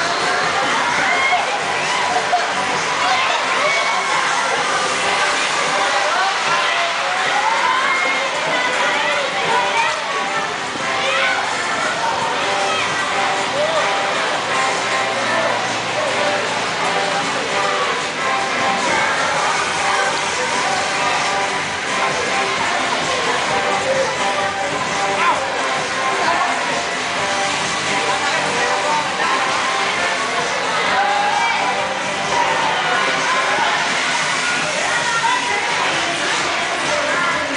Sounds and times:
Music: 0.0s - 37.5s.

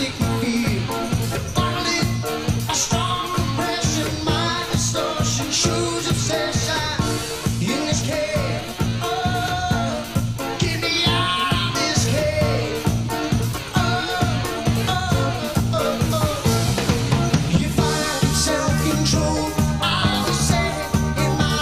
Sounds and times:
Disco: 0.0s - 21.6s
Rock and roll: 0.0s - 21.6s
Ska: 0.0s - 21.6s.

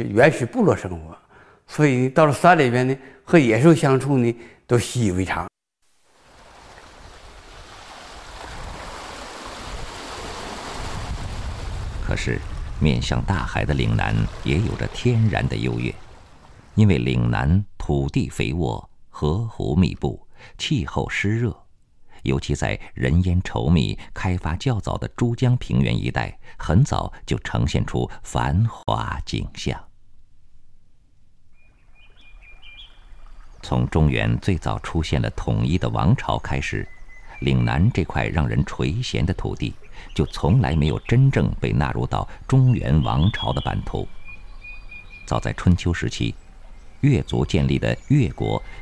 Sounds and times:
Speech: 0.0s - 5.5s, 12.0s - 16.0s, 16.8s - 29.9s, 33.6s - 44.1s, 45.3s - 46.4s, 47.0s - 48.6s.

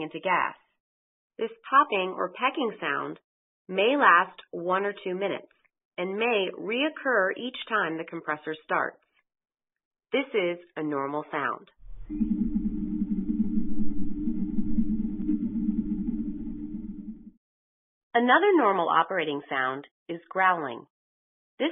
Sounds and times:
Speech: 0.0s - 0.6s, 1.4s - 9.0s, 10.2s - 11.7s, 18.2s - 20.9s.

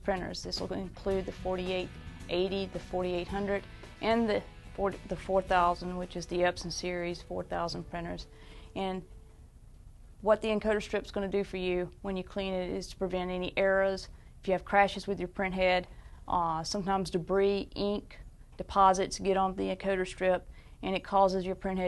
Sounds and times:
Speech: 0.0s - 9.0s, 10.2s - 21.8s.

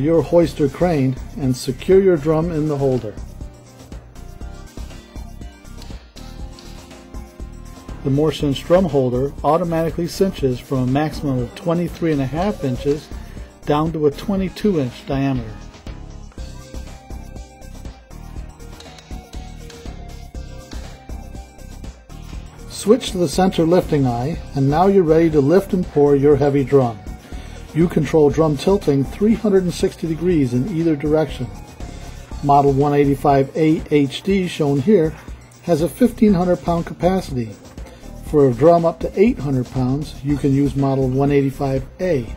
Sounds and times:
Speech: 0.0s - 3.2s, 8.0s - 15.7s, 22.7s - 27.0s, 27.7s - 31.6s, 32.4s - 37.6s, 38.2s - 42.3s.

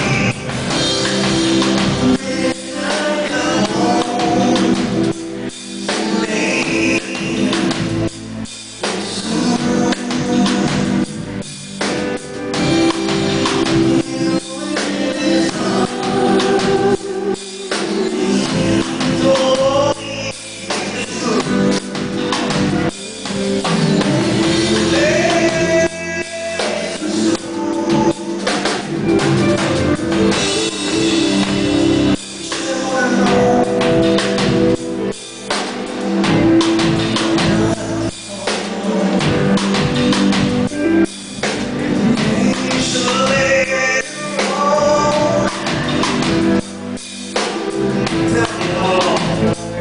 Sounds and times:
Male singing: 0.0s - 0.5s, 1.7s - 5.2s, 5.8s - 8.0s, 9.0s - 11.1s, 13.7s - 22.2s, 23.0s - 29.9s, 32.4s - 34.6s, 37.2s - 40.0s, 41.9s - 46.4s, 47.5s - 49.8s
Music: 0.0s - 49.8s.

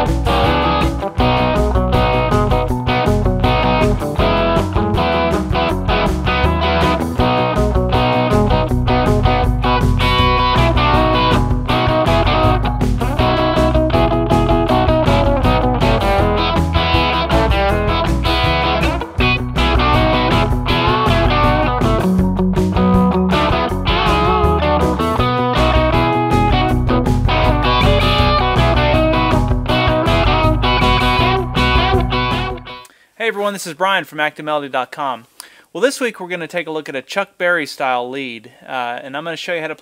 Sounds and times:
Strum: 0.0s - 32.8s
Electric guitar: 0.0s - 33.0s.

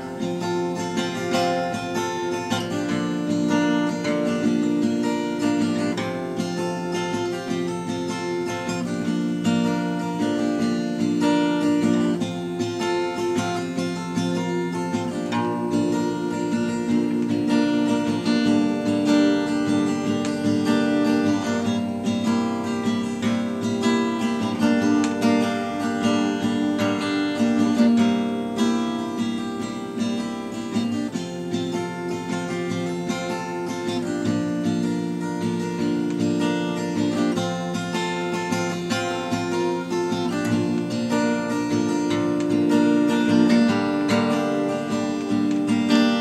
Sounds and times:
Strum: 0.0s - 46.2s.

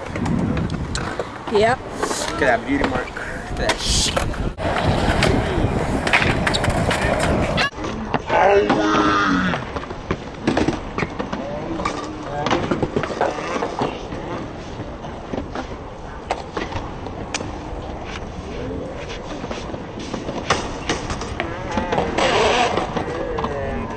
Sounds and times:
Outside, urban or manmade: 0.0s - 23.9s.

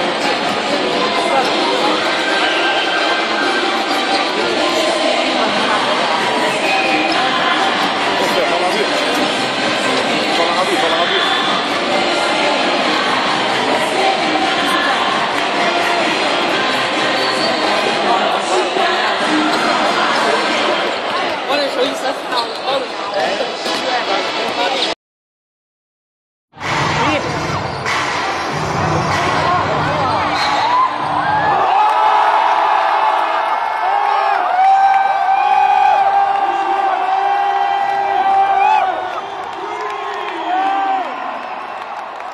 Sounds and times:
Music: 0.0s - 21.0s, 26.6s - 31.8s
Crowd: 0.0s - 25.0s, 26.6s - 42.3s.

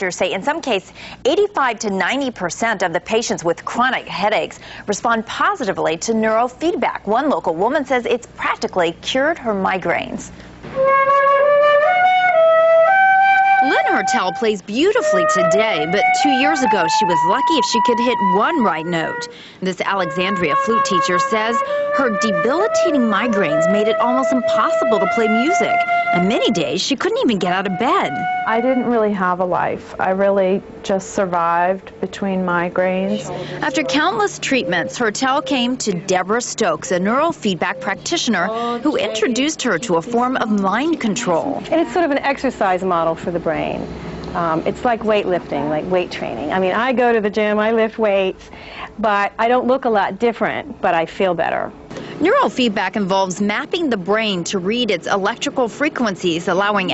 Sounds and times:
Speech: 0.0s - 10.3s, 13.6s - 48.4s, 49.0s - 56.9s
Music: 10.5s - 41.9s.

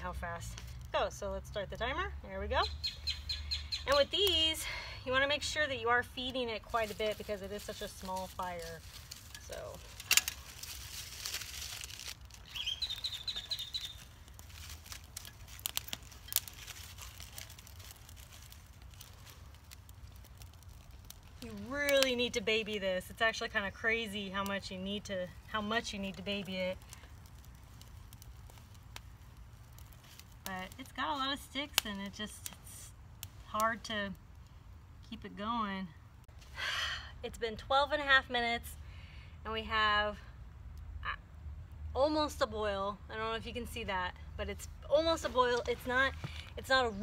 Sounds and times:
Outside, rural or natural: 0.0s - 47.0s.

